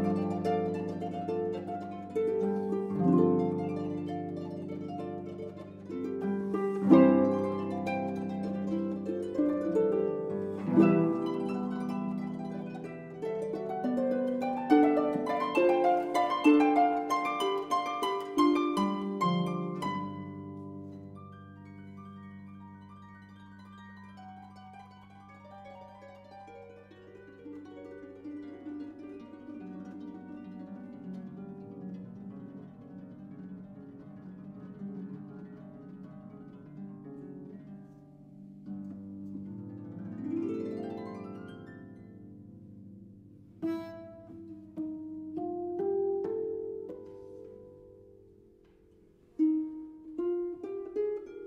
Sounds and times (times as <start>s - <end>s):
Harp: 0.0s - 51.4s
Pizzicato: 0.0s - 51.4s.